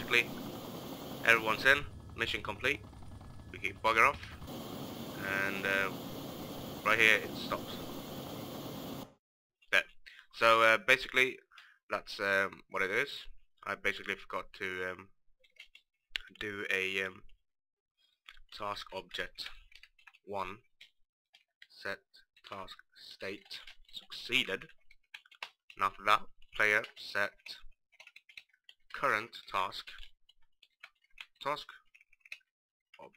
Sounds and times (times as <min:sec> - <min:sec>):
Speech: 0:00.0 - 0:00.4, 0:01.2 - 0:02.9, 0:03.5 - 0:04.4, 0:05.2 - 0:06.0, 0:06.8 - 0:07.9, 0:09.7 - 0:15.1, 0:16.2 - 0:17.2, 0:18.5 - 0:19.6, 0:20.3 - 0:20.6, 0:21.7 - 0:24.7, 0:25.8 - 0:27.7, 0:29.0 - 0:30.1, 0:31.4 - 0:31.8
Helicopter: 0:00.0 - 0:09.2.